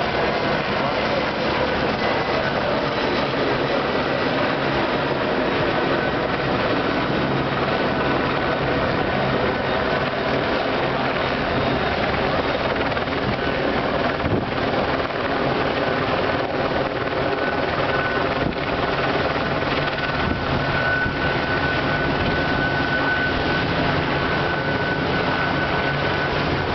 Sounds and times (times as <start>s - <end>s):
Ship: 0.0s - 26.7s.